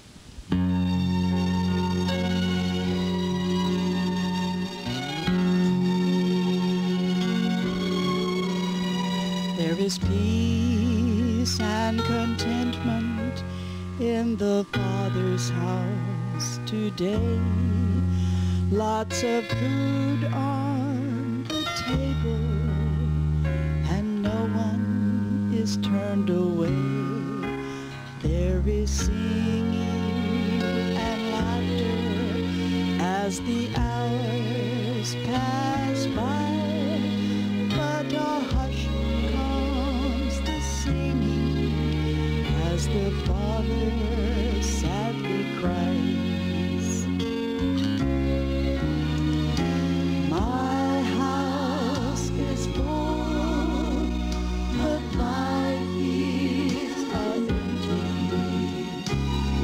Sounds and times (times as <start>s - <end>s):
Gospel music: 0.0s - 59.6s.